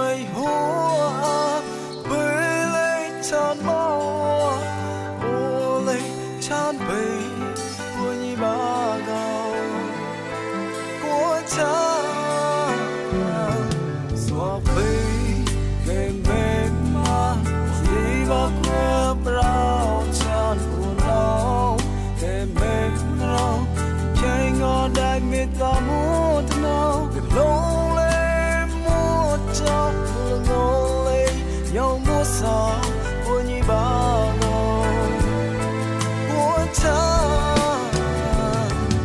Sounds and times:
Music: 0.0 - 39.0.

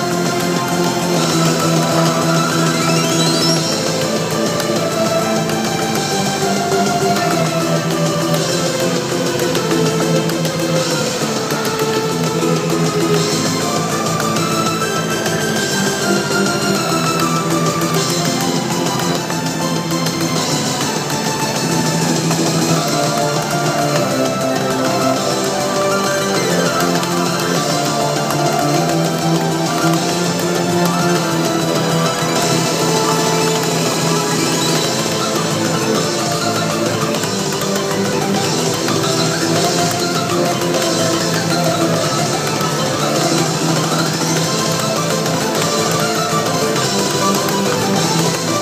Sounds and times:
Music: 0.0 - 48.6.

